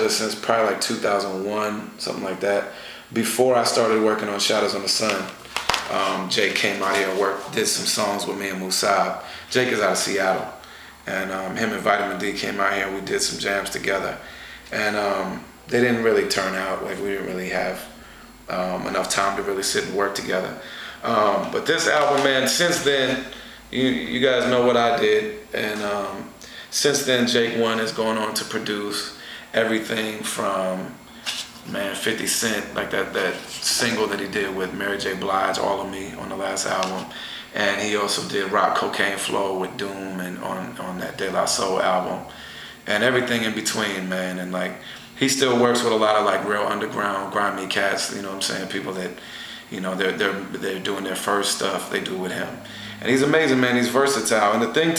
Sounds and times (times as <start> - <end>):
Speech: 0.0 - 54.9.